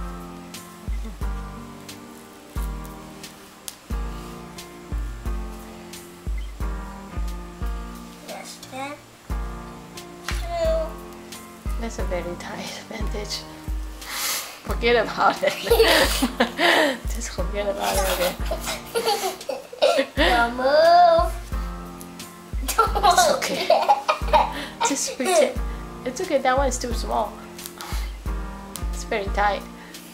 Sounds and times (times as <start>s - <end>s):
Child speech, kid speaking: 8.2s - 9.1s, 10.4s - 10.9s, 17.8s - 18.4s, 20.2s - 21.4s, 24.8s - 25.6s
Snicker: 15.6s - 16.9s, 18.0s - 20.2s, 22.7s - 25.3s.